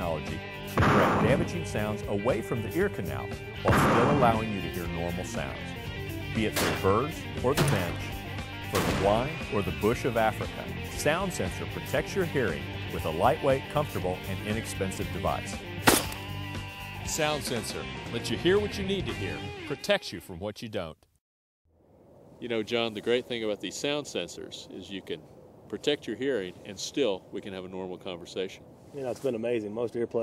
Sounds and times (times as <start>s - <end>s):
Speech: 0.0s - 5.7s, 6.3s - 8.1s, 8.8s - 15.6s, 17.1s - 21.1s, 22.4s - 30.2s.